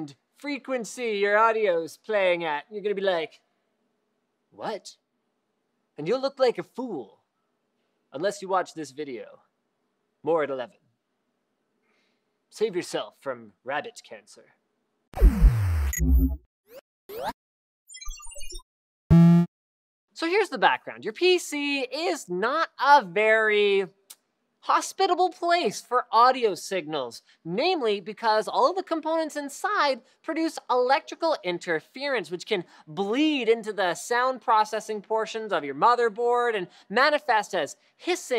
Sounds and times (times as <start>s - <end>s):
Speech: 0.0s - 3.5s, 4.6s - 5.0s, 6.0s - 7.2s, 8.1s - 9.5s, 10.2s - 10.8s, 12.5s - 14.6s, 20.2s - 24.0s, 24.6s - 38.3s.